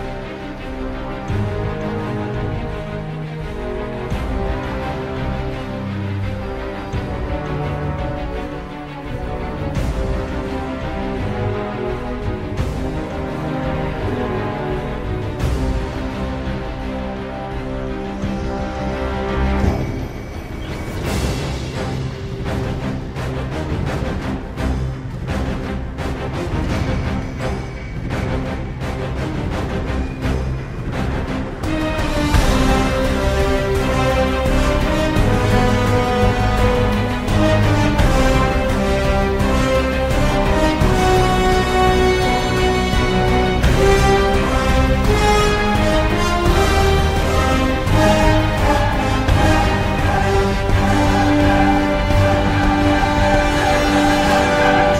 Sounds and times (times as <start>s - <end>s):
Music: 0.0s - 54.9s.